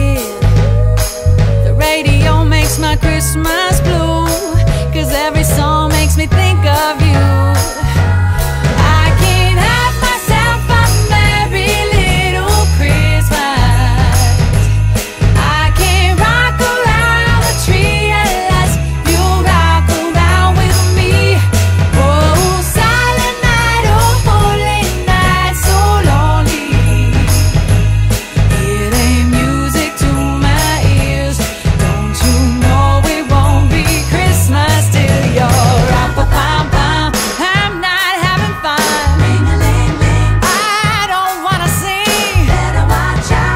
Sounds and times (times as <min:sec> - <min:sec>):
Jingle (music): 0:00.0 - 0:43.5
Jingle bell: 0:00.0 - 0:43.5.